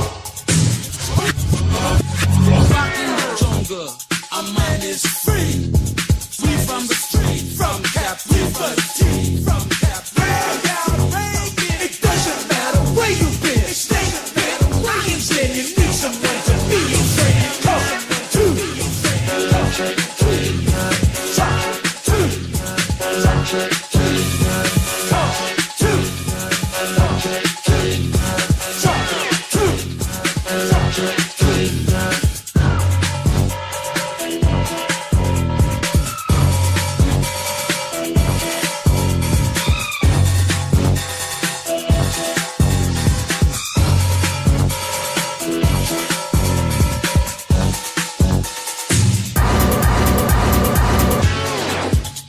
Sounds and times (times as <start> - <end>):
Music: 0.0 - 52.2.